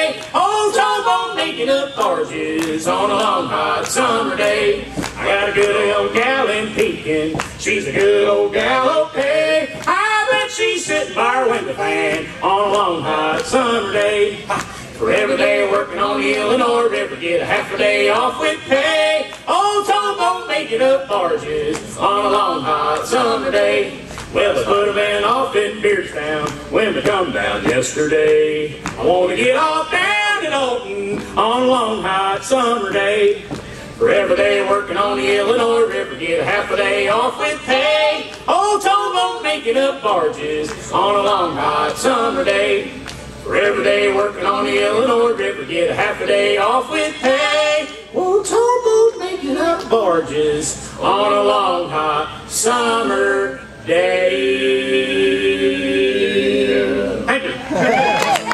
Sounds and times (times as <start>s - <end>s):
Singing: 0.0s - 58.5s.